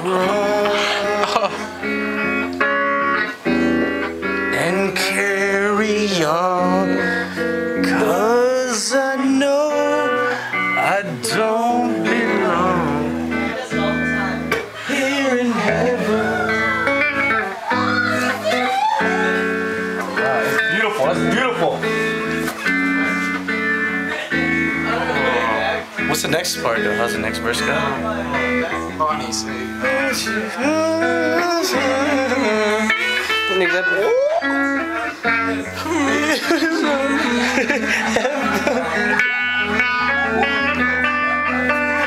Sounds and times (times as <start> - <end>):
Male singing: 0.0 - 1.8, 4.5 - 16.9, 29.4 - 34.5, 35.3 - 39.2
Music: 0.0 - 42.0
Speech: 25.0 - 29.7, 33.5 - 36.5.